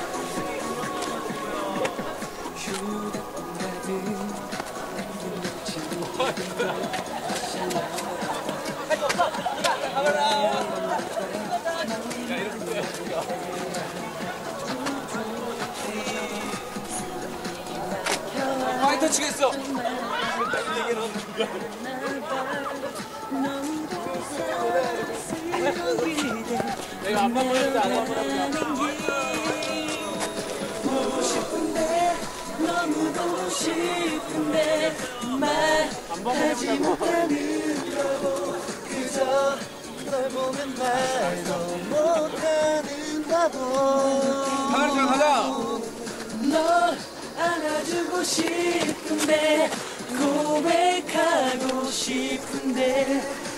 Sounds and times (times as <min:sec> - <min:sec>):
Music: 0:00.0 - 0:53.5
Speech: 0:05.0 - 0:46.6.